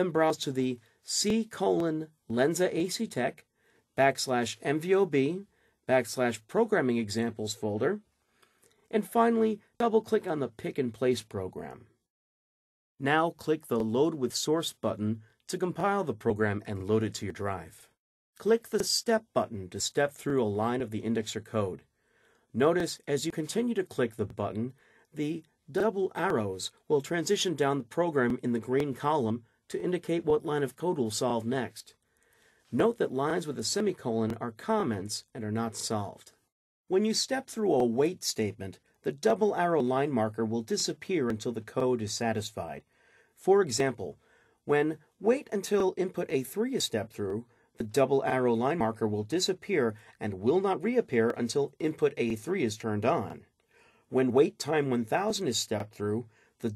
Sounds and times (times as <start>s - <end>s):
Speech: 0.0s - 8.1s, 8.9s - 11.9s, 13.0s - 21.9s, 22.6s - 32.0s, 32.7s - 53.5s, 54.1s - 56.7s.